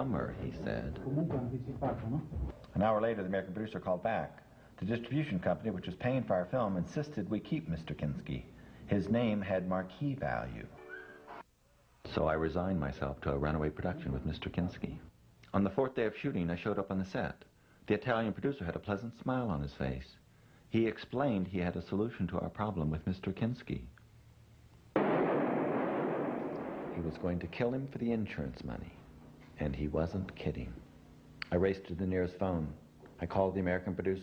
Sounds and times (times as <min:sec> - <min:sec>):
Speech: 0:00.0 - 0:10.8, 0:12.0 - 0:24.0, 0:27.0 - 0:34.2.